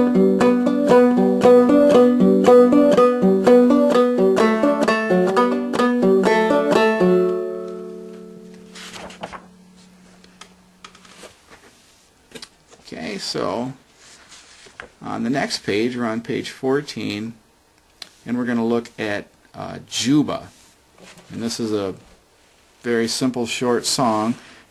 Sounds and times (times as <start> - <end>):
Banjo: 0.0 - 7.9
Speech: 12.8 - 13.8, 15.0 - 17.4, 18.2 - 20.6, 21.3 - 22.1, 22.8 - 24.4.